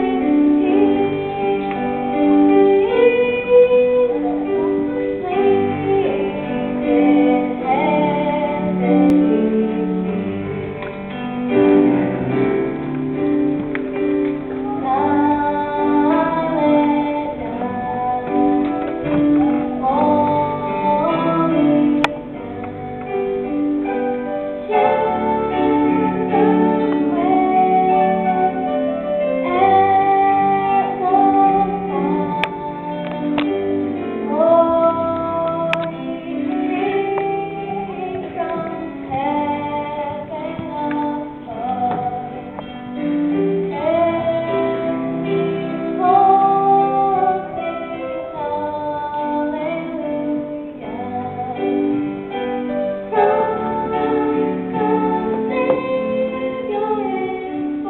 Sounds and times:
Female singing: 0:00.0 - 0:10.0, 0:14.6 - 0:23.5, 0:24.7 - 0:28.7, 0:29.4 - 0:42.6, 0:43.6 - 0:52.0, 0:53.1 - 0:57.8
Music: 0:00.0 - 0:57.8.

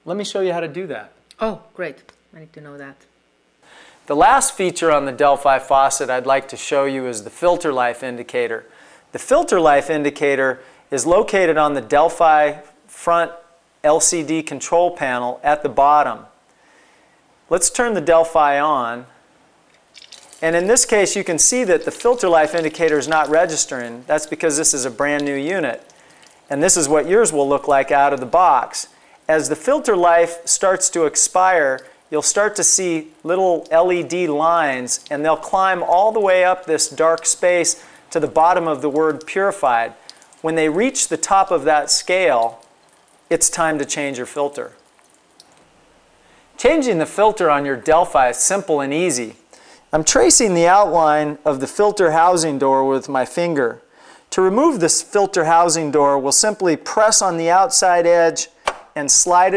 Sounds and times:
Speech: 0:00.0 - 0:03.0, 0:04.1 - 0:16.3, 0:17.5 - 0:19.1, 0:20.4 - 0:25.8, 0:26.5 - 0:42.6, 0:43.3 - 0:44.8, 0:46.6 - 0:59.5.

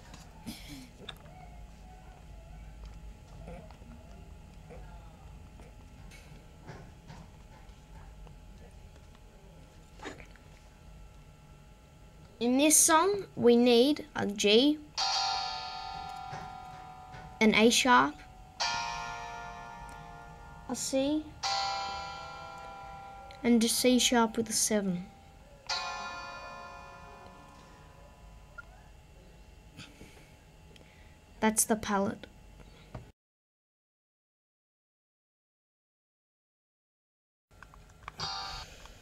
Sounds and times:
Speech: 0:12.4 - 0:14.9, 0:17.4 - 0:18.2, 0:20.7 - 0:21.3, 0:23.4 - 0:25.1, 0:31.4 - 0:32.3.

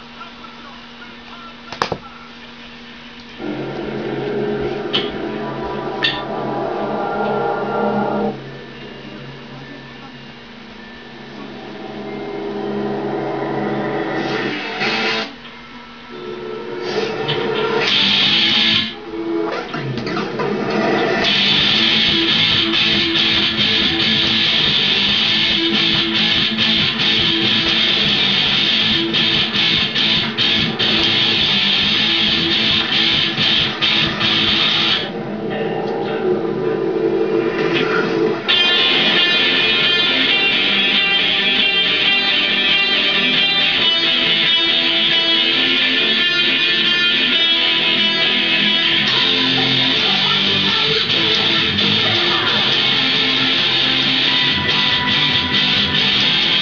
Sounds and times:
Electric guitar: 0:03.2 - 0:15.6, 0:16.2 - 0:56.6.

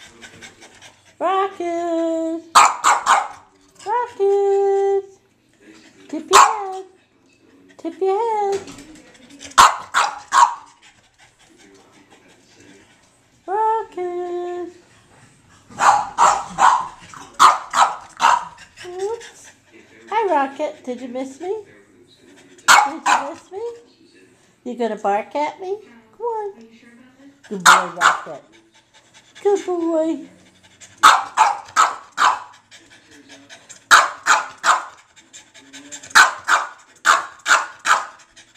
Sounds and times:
Speech: 0:00.0 - 0:02.5, 0:03.7 - 0:09.8, 0:11.4 - 0:14.8, 0:18.8 - 0:28.6, 0:29.4 - 0:30.6
Bark: 0:02.6 - 0:03.5, 0:06.3 - 0:06.8, 0:09.6 - 0:10.7, 0:15.8 - 0:18.6, 0:22.7 - 0:23.4, 0:27.7 - 0:28.3, 0:31.0 - 0:32.5, 0:33.9 - 0:35.0, 0:36.2 - 0:38.2.

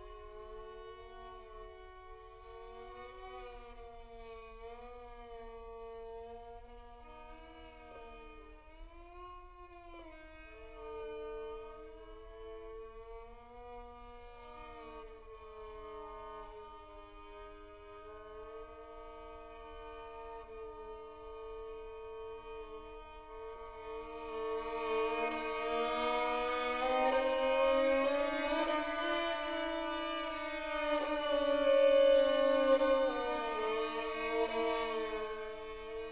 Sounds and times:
Violin, fiddle: 0:00.0 - 0:36.1.

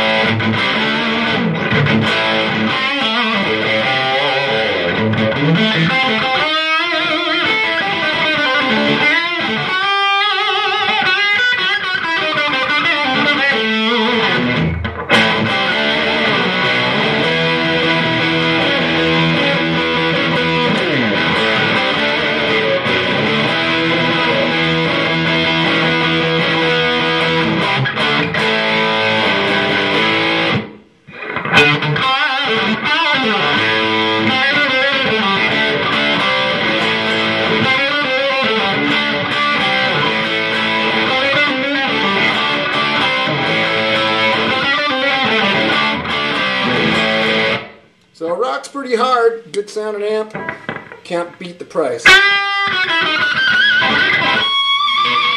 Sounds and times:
Music: 0:00.0 - 0:47.9, 0:50.3 - 0:51.0, 0:52.0 - 0:55.3.

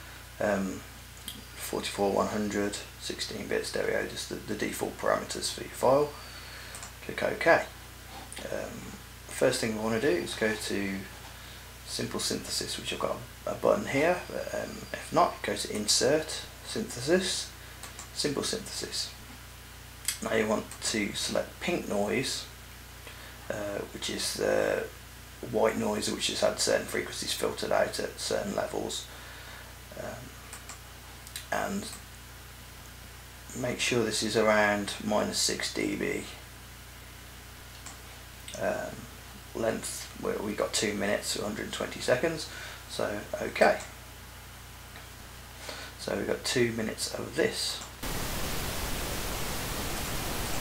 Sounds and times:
Speech: 0:00.4 - 0:06.2, 0:07.0 - 0:07.8, 0:08.4 - 0:11.2, 0:11.8 - 0:17.6, 0:18.2 - 0:19.2, 0:20.1 - 0:22.6, 0:23.5 - 0:29.1, 0:29.9 - 0:30.4, 0:31.4 - 0:32.0, 0:33.5 - 0:36.5, 0:38.5 - 0:43.9, 0:46.0 - 0:47.9.

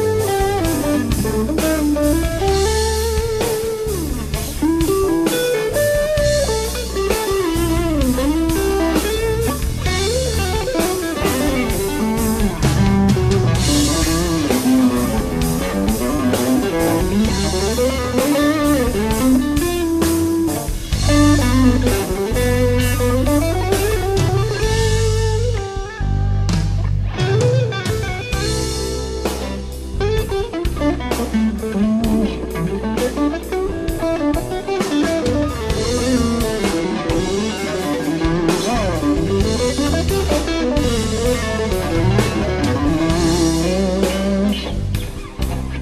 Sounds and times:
Music: 0:00.0 - 0:45.8.

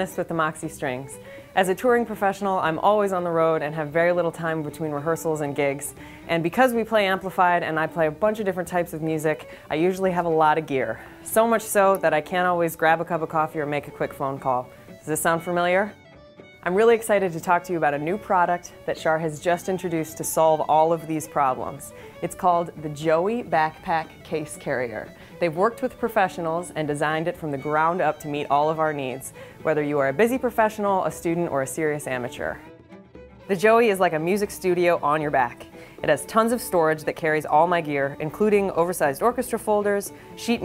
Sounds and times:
Speech: 0:00.0 - 0:16.0, 0:16.6 - 0:32.6, 0:33.5 - 0:40.6.

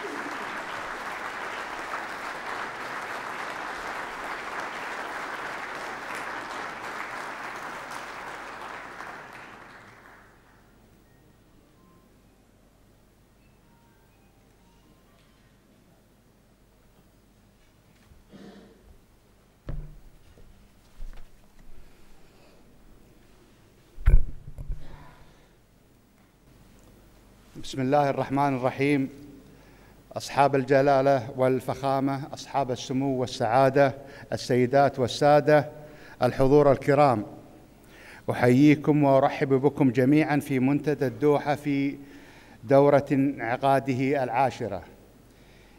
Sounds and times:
Male speech, man speaking: 0:27.6 - 0:29.2, 0:30.2 - 0:37.4, 0:38.3 - 0:42.0, 0:42.7 - 0:44.9.

